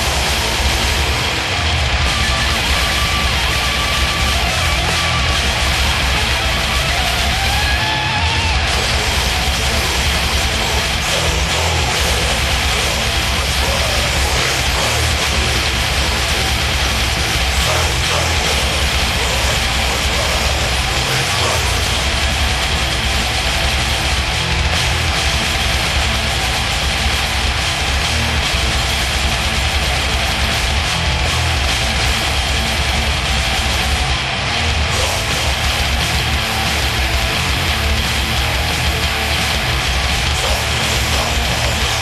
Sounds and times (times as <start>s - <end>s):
Music: 0.0s - 42.0s.